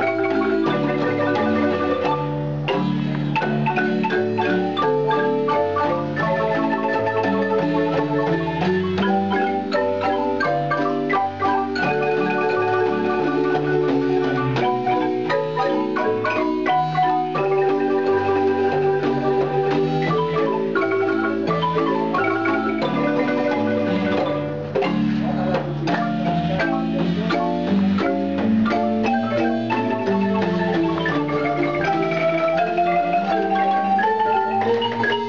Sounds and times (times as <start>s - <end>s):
Marimba, xylophone: 0.0s - 35.2s.